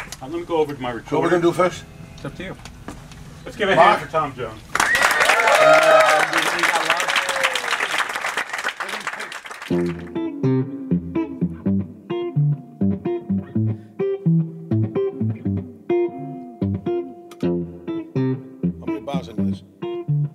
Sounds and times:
Music: 0:09.7 - 0:20.3.

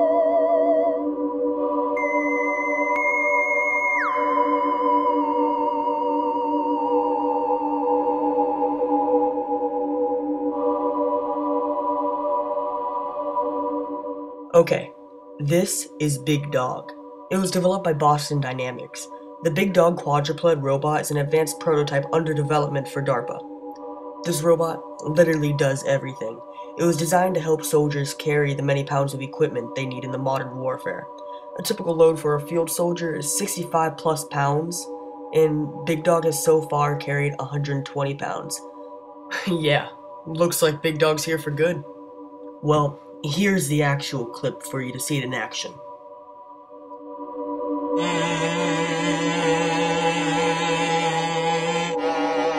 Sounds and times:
Music: 0:00.0 - 0:52.5
Speech: 0:14.6 - 0:23.4, 0:24.3 - 0:38.6, 0:39.3 - 0:41.8, 0:42.6 - 0:45.8, 0:48.0 - 0:52.5.

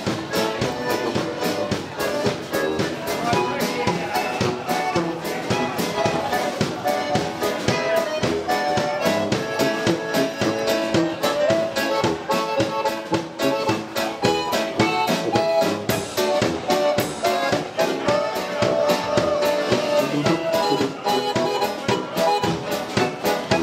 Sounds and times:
Speech: 0:00.0 - 0:23.6.

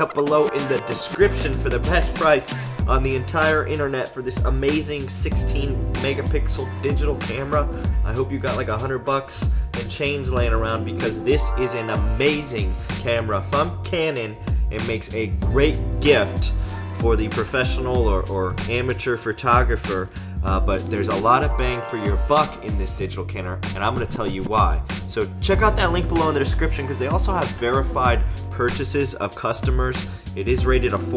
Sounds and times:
Music: 0:00.0 - 0:31.1
Speech: 0:00.0 - 0:31.1.

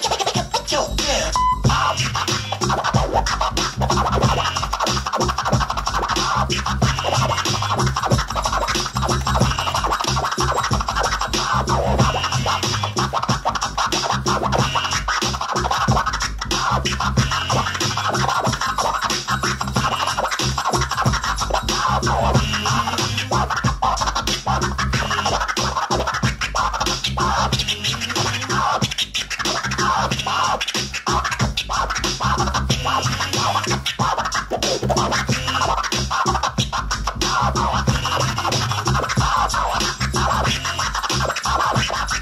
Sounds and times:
Scratching (performance technique): 0:00.0 - 0:42.2.

